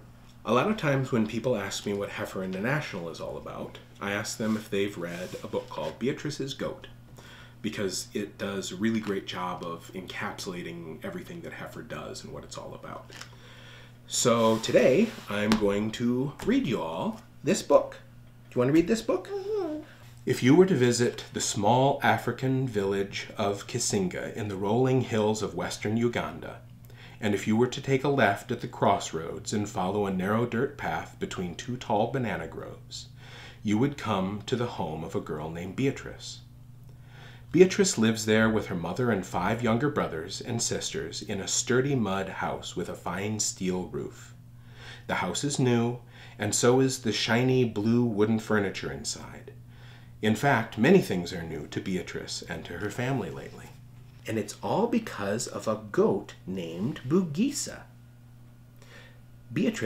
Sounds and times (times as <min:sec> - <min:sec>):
Speech: 0:00.4 - 0:07.0, 0:07.6 - 0:13.2, 0:14.1 - 0:36.5, 0:37.5 - 0:44.4, 0:45.1 - 0:49.6, 0:50.2 - 0:57.9, 0:59.5 - 0:59.8.